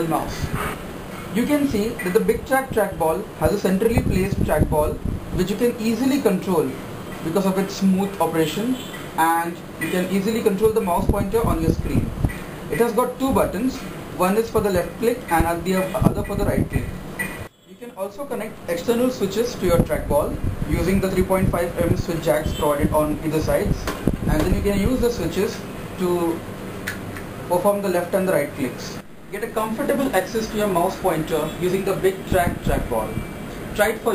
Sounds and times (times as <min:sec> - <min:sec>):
Speech: 0:00.0 - 0:00.5, 0:01.4 - 0:12.1, 0:12.7 - 0:17.0, 0:17.7 - 0:26.4, 0:27.5 - 0:33.2, 0:33.8 - 0:34.1.